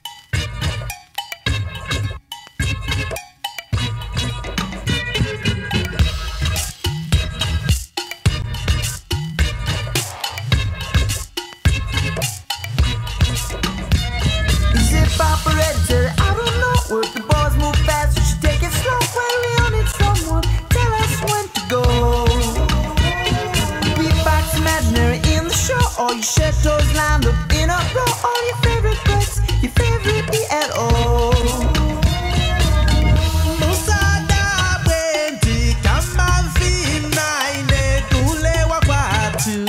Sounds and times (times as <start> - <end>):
Afrobeat: 0.0 - 39.6.